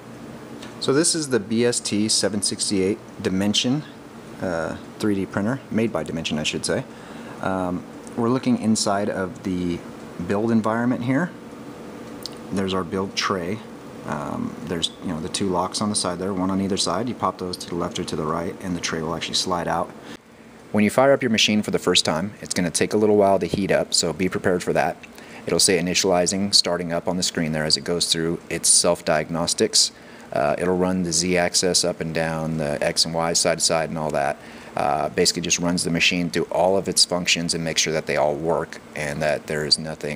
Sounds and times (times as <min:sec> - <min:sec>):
Speech: 0:00.8 - 0:11.4, 0:12.3 - 0:20.0, 0:20.7 - 0:40.1.